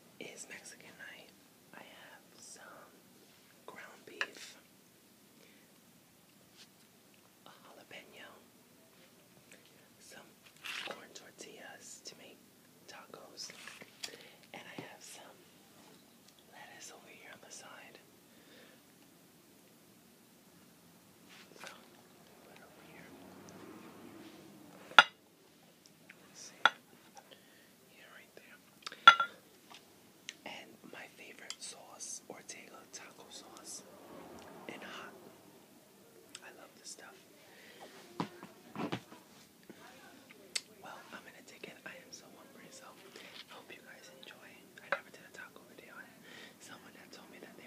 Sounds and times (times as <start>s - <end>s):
Whispering: 0.2s - 3.0s, 3.7s - 4.7s, 7.4s - 9.1s, 9.7s - 13.8s, 14.5s - 15.6s, 16.5s - 18.0s, 21.5s - 23.6s, 26.1s - 26.8s, 27.9s - 28.6s, 30.4s - 35.3s, 36.2s - 38.6s, 39.7s - 47.6s.